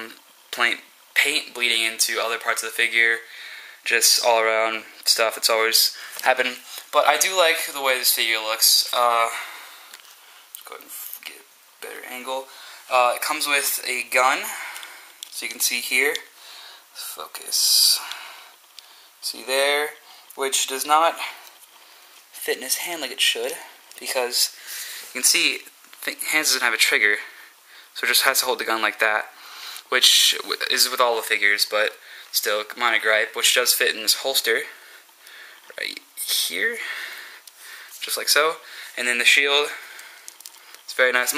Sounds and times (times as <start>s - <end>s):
Speech: 0.0s - 9.6s, 10.6s - 14.7s, 15.3s - 16.3s, 17.0s - 18.2s, 19.2s - 21.4s, 22.4s - 27.3s, 28.0s - 34.8s, 35.7s - 37.0s, 38.0s - 39.8s, 40.9s - 41.3s.